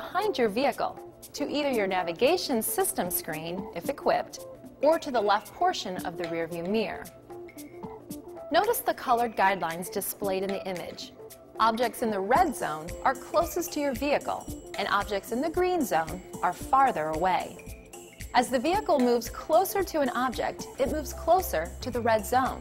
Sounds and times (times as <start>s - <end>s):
Speech: 0.0s - 7.1s, 8.5s - 17.6s, 18.4s - 22.6s
Music: 0.0s - 22.6s.